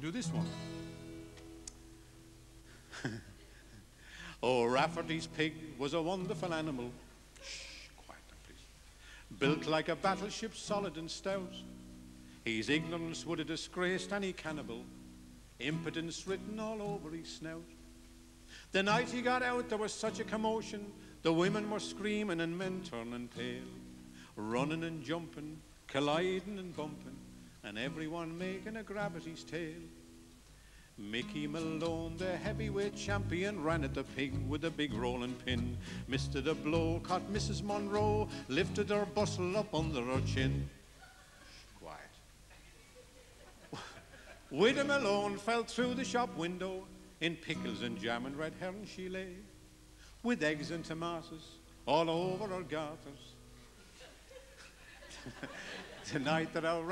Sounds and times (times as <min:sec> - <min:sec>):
Music: 0:00.0 - 0:02.8, 0:04.6 - 0:06.9, 0:09.3 - 0:30.3, 0:31.1 - 0:40.8, 0:44.6 - 0:53.6.